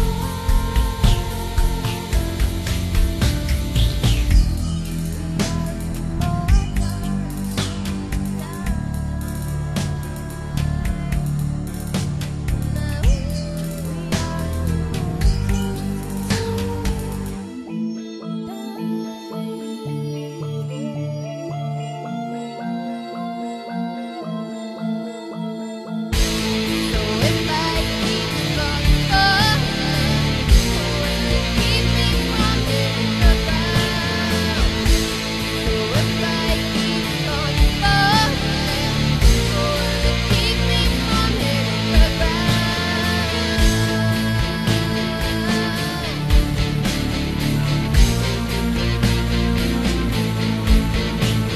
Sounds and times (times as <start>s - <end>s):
Heavy metal: 0.0s - 17.6s, 26.1s - 51.5s.